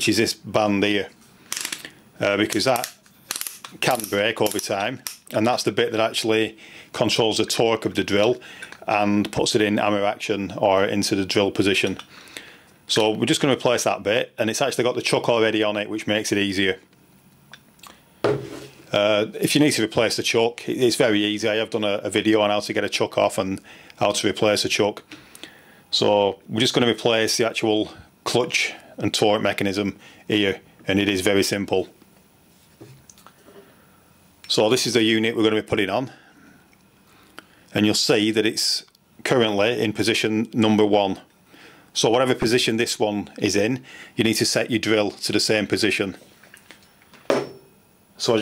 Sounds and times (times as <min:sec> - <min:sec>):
Speech: 0:00.0 - 0:01.2, 0:02.2 - 0:03.0, 0:03.8 - 0:12.0, 0:12.9 - 0:16.8, 0:18.9 - 0:25.1, 0:25.9 - 0:32.0, 0:34.5 - 0:36.2, 0:37.7 - 0:41.3, 0:42.0 - 0:46.2, 0:48.2 - 0:48.4.